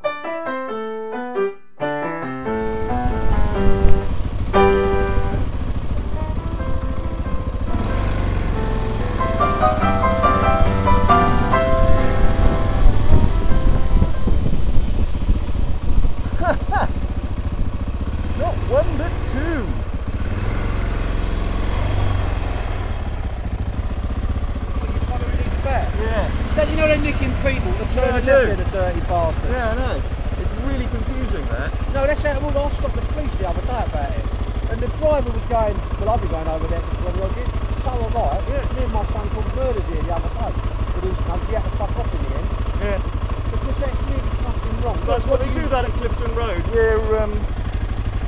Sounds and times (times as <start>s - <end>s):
Speech: 18.4s - 19.8s, 24.8s - 47.5s.